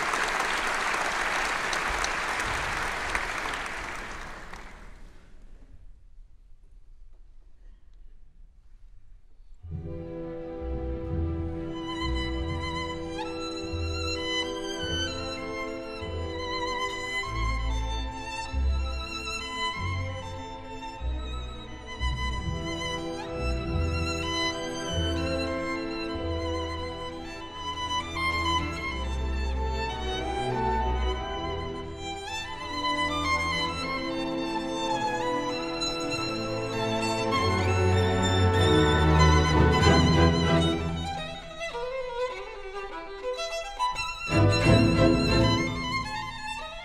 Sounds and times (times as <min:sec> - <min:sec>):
Violin, fiddle: 0:09.9 - 0:46.8.